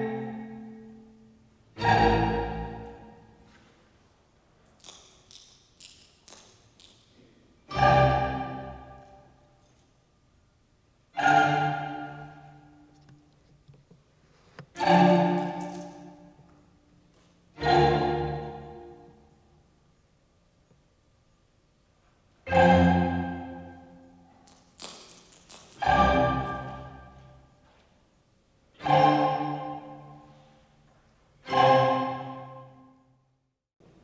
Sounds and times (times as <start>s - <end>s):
Music: 0.0s - 3.5s, 7.7s - 9.4s, 11.2s - 13.2s, 14.7s - 16.8s, 17.5s - 19.4s, 22.5s - 24.3s, 25.8s - 27.5s, 28.8s - 33.4s.